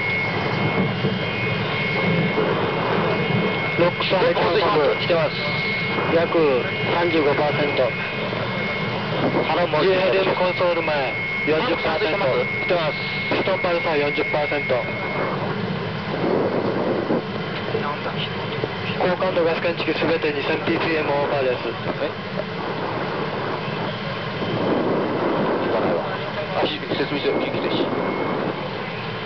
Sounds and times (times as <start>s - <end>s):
Speech: 3.8s - 8.1s, 9.4s - 15.0s, 17.6s - 22.2s, 25.6s - 28.0s.